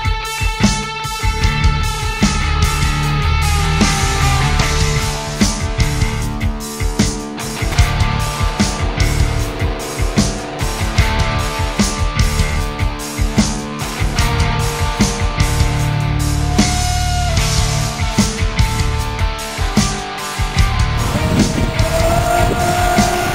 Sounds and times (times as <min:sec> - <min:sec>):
Music: 0:00.0 - 0:23.3.